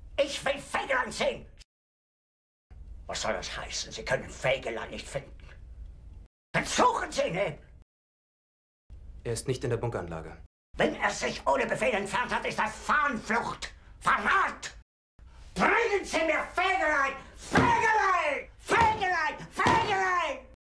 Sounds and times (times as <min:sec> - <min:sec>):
Speech: 0:00.2 - 0:01.6, 0:03.1 - 0:05.4, 0:06.6 - 0:07.7, 0:09.2 - 0:14.8, 0:15.6 - 0:20.6.